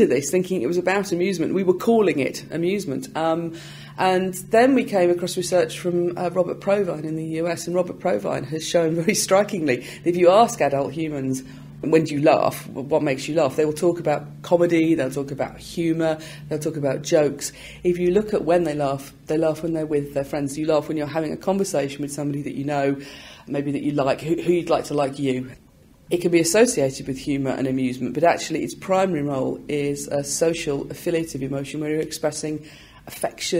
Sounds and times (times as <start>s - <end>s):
Speech: 0.0s - 33.5s.